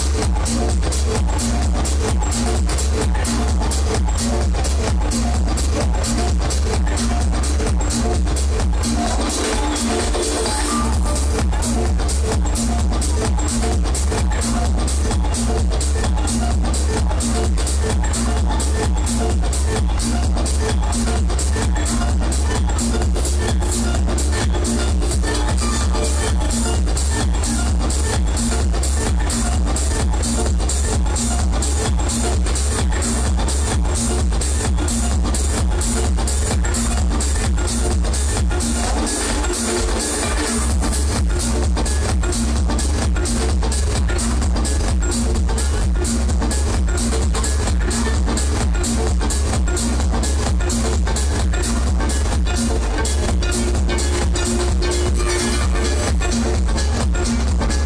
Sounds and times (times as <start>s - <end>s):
Music: 0.0s - 57.8s.